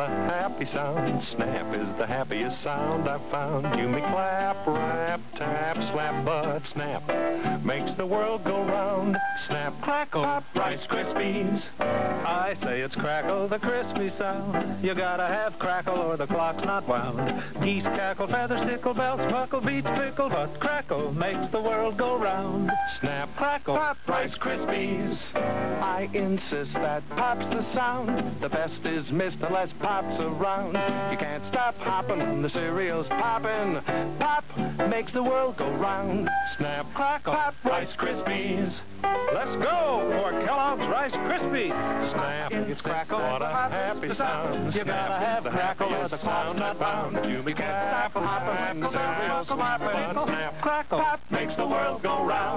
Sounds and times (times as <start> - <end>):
Music: 0.0 - 52.5.